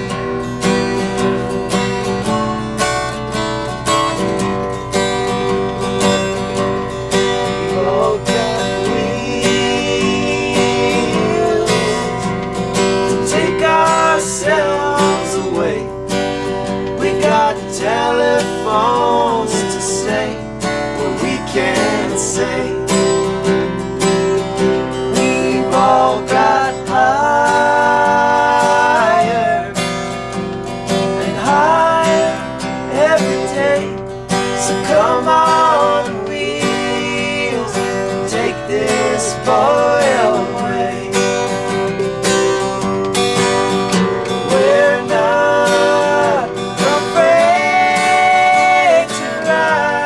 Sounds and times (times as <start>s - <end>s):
Music: 0.0s - 50.0s
Male singing: 7.7s - 12.3s, 13.1s - 16.0s, 17.0s - 23.0s, 25.1s - 29.8s, 31.2s - 34.0s, 34.6s - 41.3s, 44.4s - 50.0s.